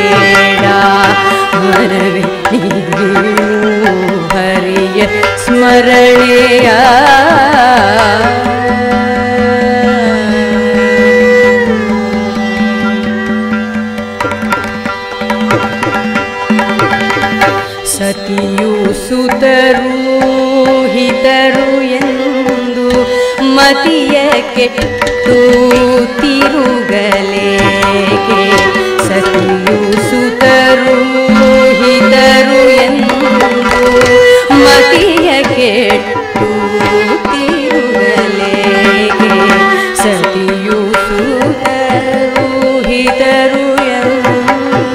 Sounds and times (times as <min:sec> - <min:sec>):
Carnatic music: 0:00.0 - 0:44.9
Tabla: 0:00.0 - 0:44.9.